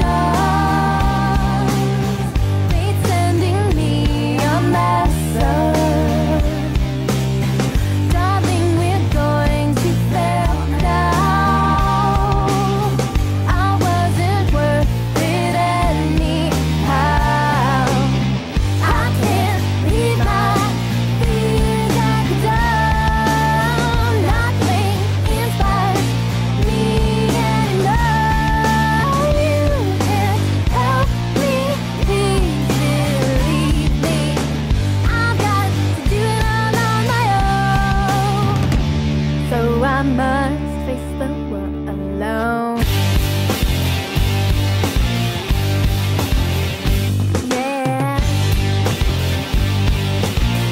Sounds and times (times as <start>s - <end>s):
Music: 0.0s - 50.7s.